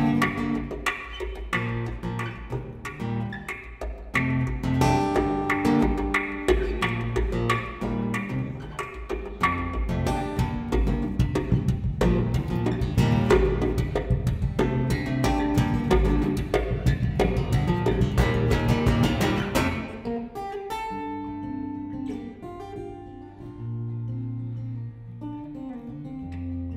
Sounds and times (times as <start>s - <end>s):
Guitar: 0.0s - 26.7s.